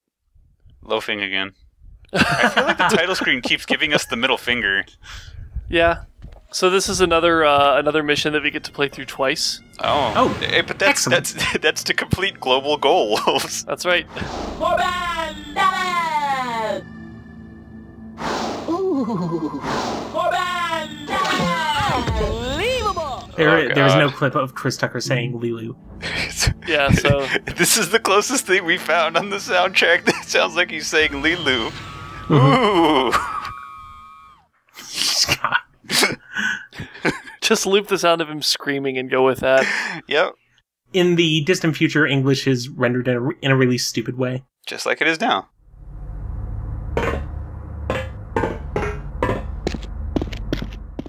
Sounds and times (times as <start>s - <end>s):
Speech: 0.8s - 1.5s, 2.4s - 5.0s, 5.7s - 16.8s, 20.2s - 31.7s, 34.8s - 45.5s.